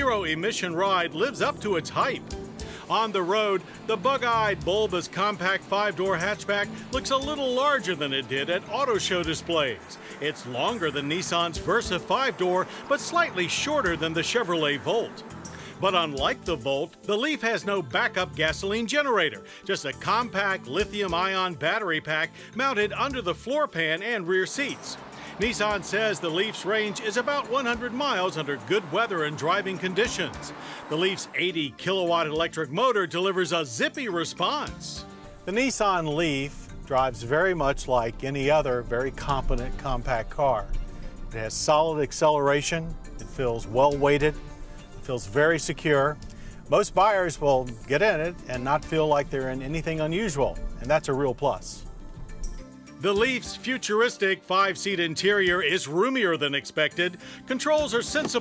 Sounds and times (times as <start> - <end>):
Speech: 0.0 - 2.2, 2.9 - 15.2, 15.8 - 40.7, 41.3 - 44.3, 45.1 - 51.8, 53.0 - 58.4
Music: 0.0 - 58.4.